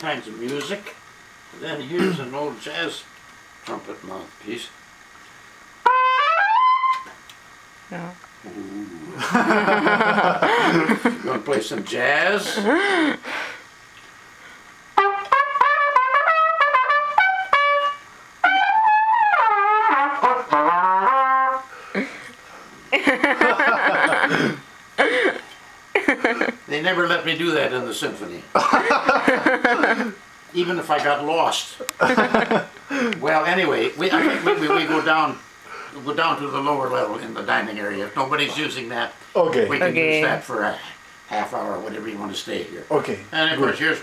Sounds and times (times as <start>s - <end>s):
Speech: 0.0s - 1.0s, 1.6s - 3.1s, 3.7s - 4.8s, 11.2s - 12.6s, 26.7s - 28.5s, 30.5s - 31.9s, 33.2s - 35.4s, 36.0s - 44.0s
Trumpet: 5.8s - 7.2s, 15.0s - 21.8s.